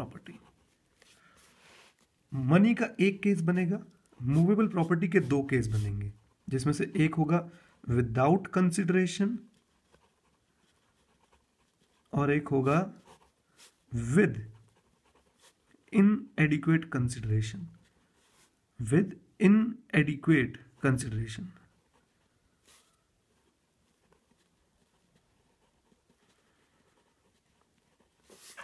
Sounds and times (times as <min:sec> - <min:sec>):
Speech: 0:00.0 - 0:00.5, 0:02.3 - 0:09.5, 0:12.1 - 0:13.1, 0:13.9 - 0:14.6, 0:15.9 - 0:17.8, 0:18.8 - 0:21.6
Inside, small room: 0:00.0 - 0:28.6.